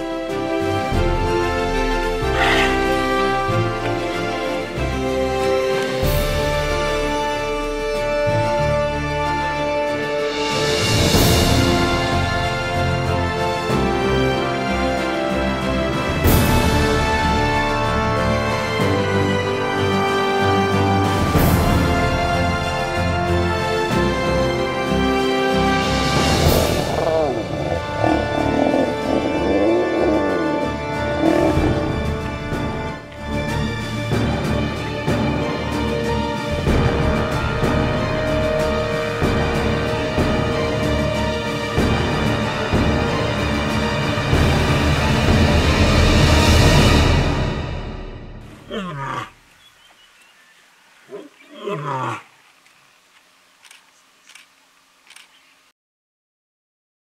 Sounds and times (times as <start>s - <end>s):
Music: 0.0s - 49.3s
Outside, rural or natural: 0.0s - 55.7s
Roaring cats (lions, tigers): 26.2s - 32.1s, 48.5s - 49.4s, 51.1s - 52.3s.